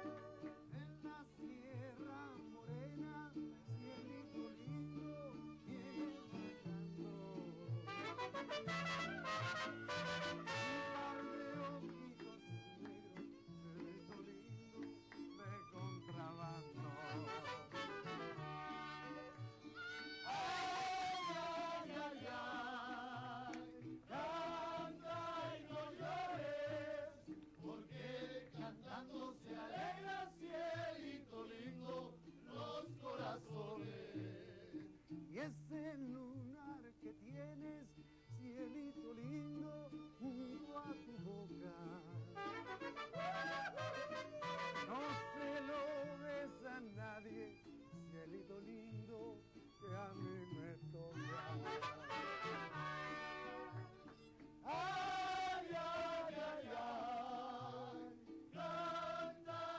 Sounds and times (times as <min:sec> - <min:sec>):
Male singing: 0:00.0 - 0:53.8, 0:54.6 - 0:59.7
Choir: 0:20.2 - 0:34.8, 0:54.6 - 0:59.7.